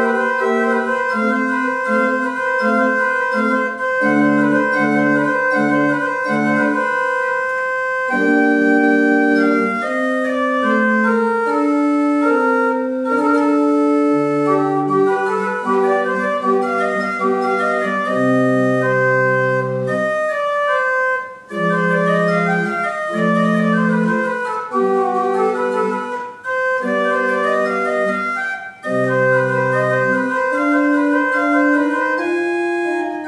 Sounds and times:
Organ: 0:00.0 - 0:33.2.

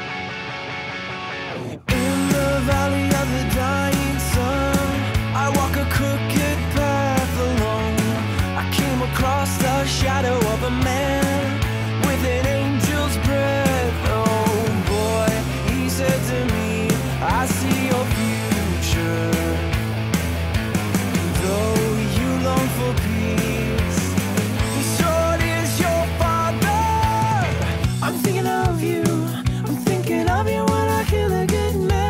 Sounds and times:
Blues: 0:00.0 - 0:32.0.

